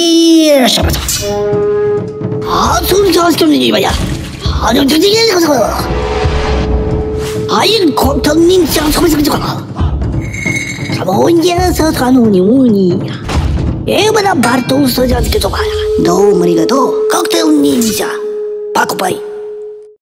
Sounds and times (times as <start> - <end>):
Speech: 0.0 - 1.0, 2.5 - 5.9, 7.5 - 9.7, 11.0 - 13.2, 13.9 - 18.2, 18.8 - 19.3
Music: 0.0 - 20.0.